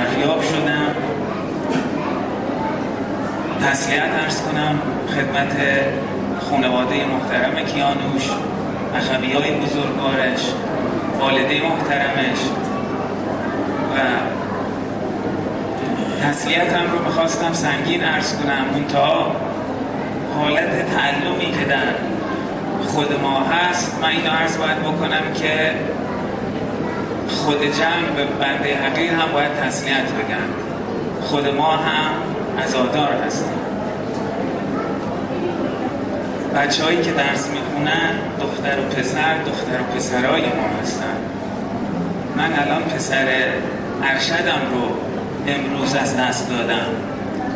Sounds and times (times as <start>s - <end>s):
Male speech, man speaking: 0.0s - 1.2s, 3.5s - 12.7s, 13.8s - 14.4s, 15.9s - 19.4s, 20.3s - 22.1s, 22.8s - 26.0s, 27.3s - 30.6s, 31.2s - 33.6s, 36.5s - 41.3s, 42.4s - 47.0s
Narration, monologue: 0.0s - 33.8s, 36.2s - 47.4s.